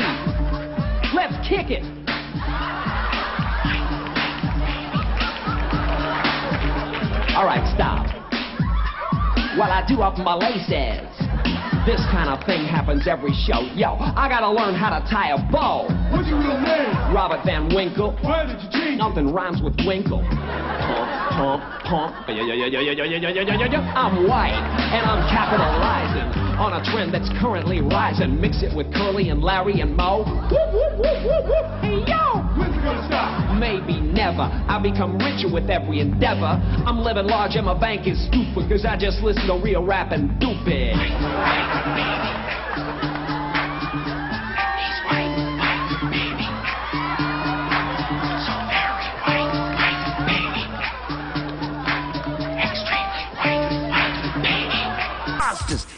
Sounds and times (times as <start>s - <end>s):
Dance music: 0.0s - 55.9s.